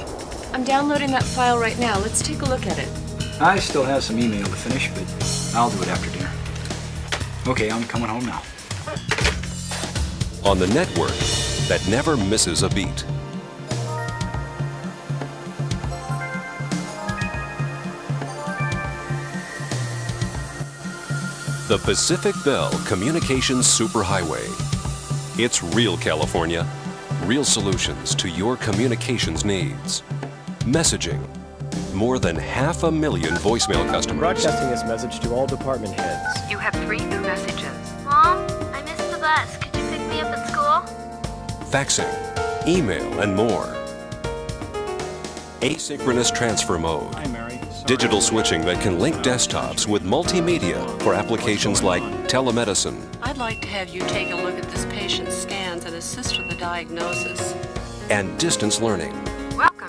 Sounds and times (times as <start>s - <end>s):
Music: 0.0s - 59.8s
Speech: 3.4s - 6.3s, 7.5s - 8.4s, 10.4s - 13.1s, 21.7s - 24.6s, 25.4s - 30.0s, 30.6s - 31.3s, 31.9s - 37.8s, 41.7s - 43.8s, 45.6s - 57.5s, 58.1s - 59.8s.